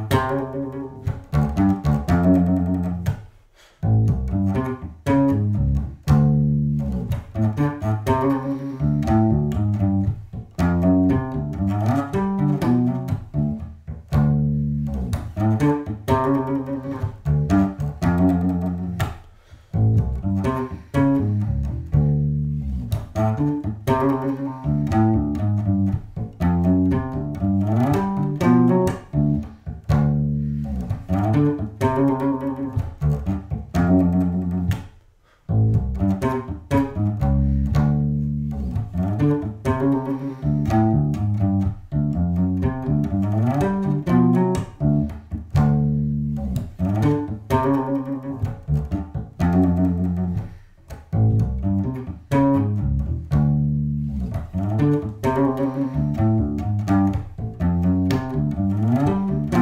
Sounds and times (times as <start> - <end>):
Bass guitar: 0.0 - 59.6.